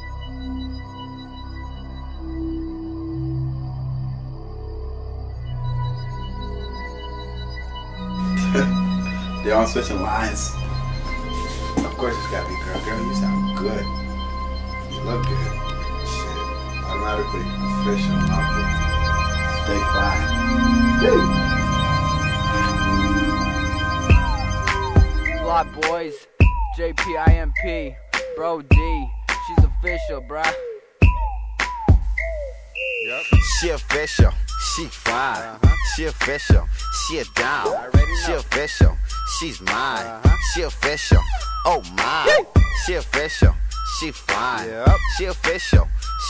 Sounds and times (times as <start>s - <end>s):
Independent music: 6.2s - 46.2s.